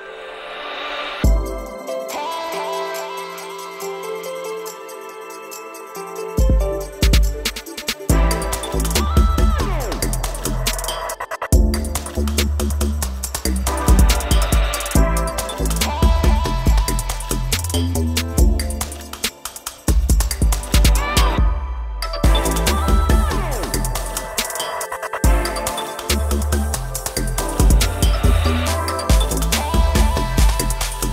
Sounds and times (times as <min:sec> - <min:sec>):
Music: 0:00.0 - 0:31.1.